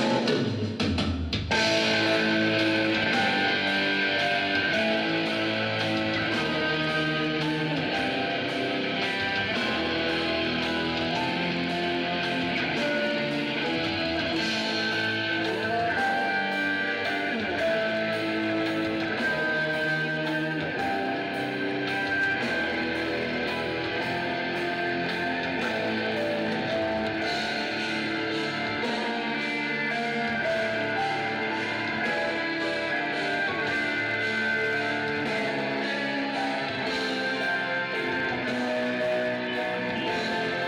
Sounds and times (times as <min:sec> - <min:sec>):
Electric guitar: 0:00.0 - 0:40.6
Strum: 0:01.5 - 0:40.6.